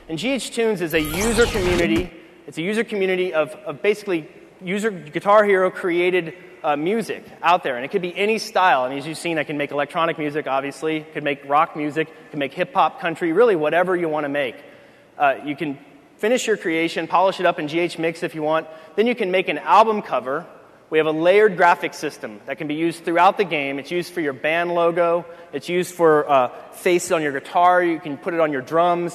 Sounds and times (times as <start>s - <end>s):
Speech: 0.0s - 14.6s, 15.2s - 29.1s.